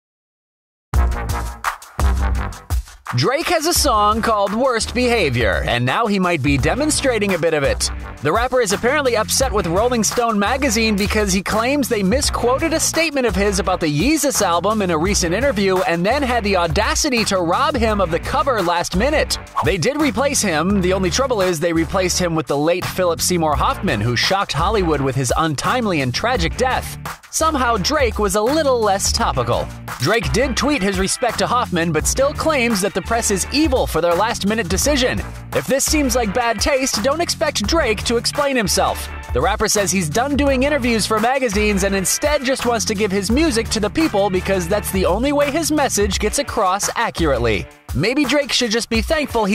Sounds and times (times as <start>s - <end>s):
Music: 0.9s - 49.5s
Speech: 3.1s - 49.5s.